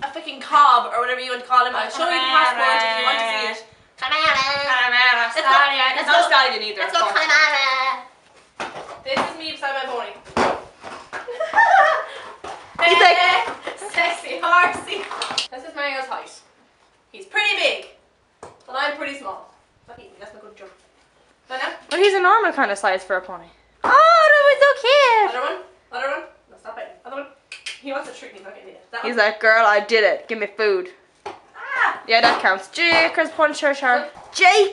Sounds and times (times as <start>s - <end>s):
Inside, small room: 0.0s - 34.7s.